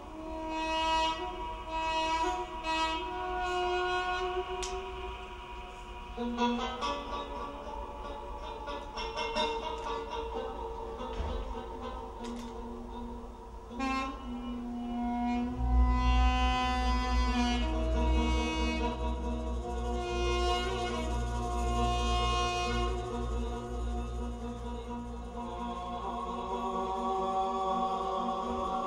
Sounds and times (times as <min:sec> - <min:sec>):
Music: 0:00.0 - 0:28.8.